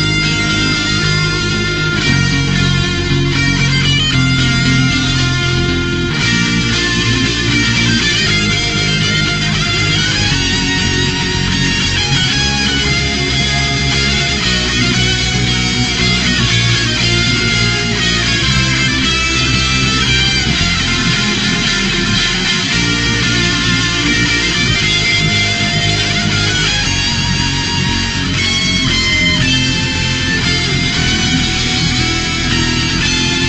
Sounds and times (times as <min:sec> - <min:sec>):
Music: 0:00.0 - 0:33.4.